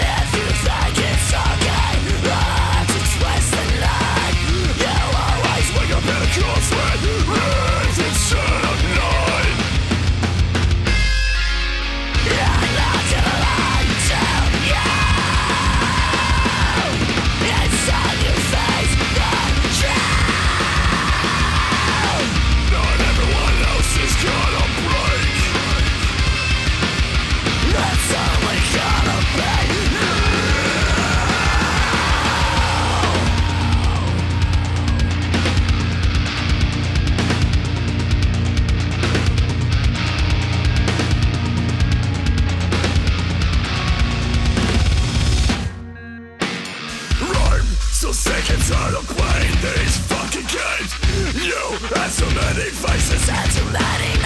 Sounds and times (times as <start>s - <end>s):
Singing: 0.0s - 9.6s, 12.2s - 26.1s, 27.6s - 35.2s, 46.9s - 54.2s
Angry music: 0.0s - 54.2s.